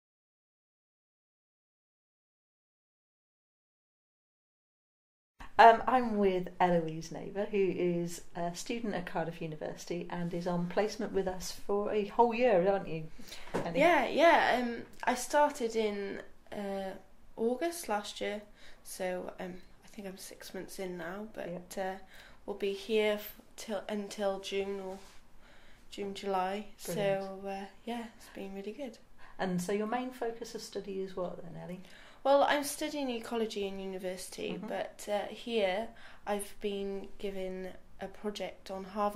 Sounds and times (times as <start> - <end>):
Speech: 5.6 - 25.0, 25.9 - 39.1.